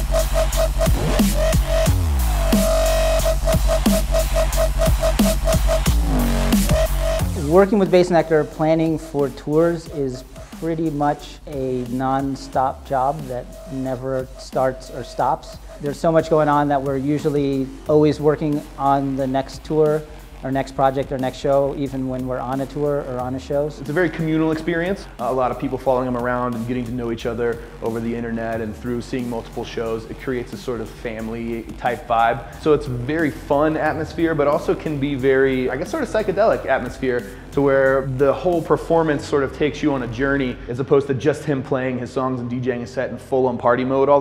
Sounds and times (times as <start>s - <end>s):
Music: 0.0s - 44.2s
Speech: 7.4s - 44.2s.